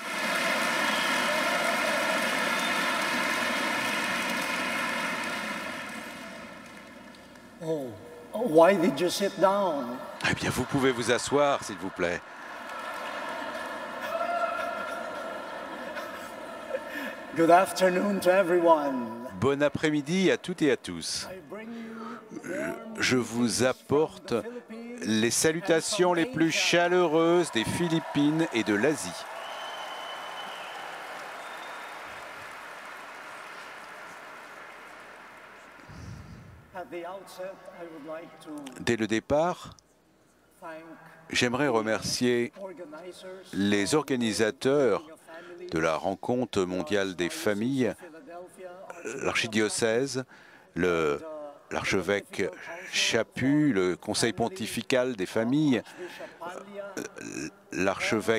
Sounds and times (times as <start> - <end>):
Speech: 7.6 - 12.2, 17.4 - 29.2, 36.8 - 39.7, 40.6 - 58.3.